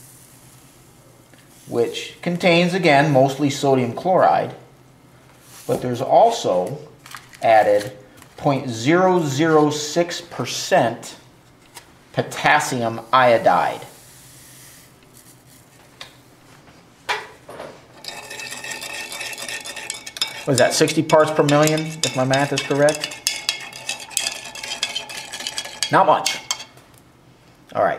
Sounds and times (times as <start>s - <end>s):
Speech: 1.7s - 4.6s, 5.7s - 11.2s, 12.1s - 13.9s, 20.5s - 23.1s, 25.9s - 26.4s, 27.7s - 27.9s.